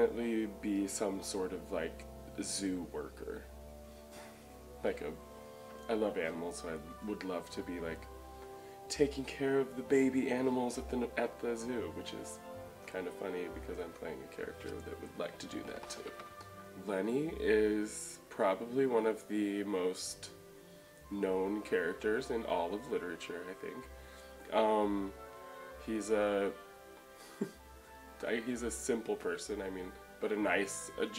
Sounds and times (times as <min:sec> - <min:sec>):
Speech: 0:00.0 - 0:03.5, 0:04.8 - 0:05.2, 0:05.9 - 0:08.1, 0:08.9 - 0:16.2, 0:16.8 - 0:20.4, 0:21.1 - 0:23.9, 0:24.5 - 0:25.2, 0:25.8 - 0:26.6, 0:28.2 - 0:31.1
Music: 0:00.0 - 0:31.1.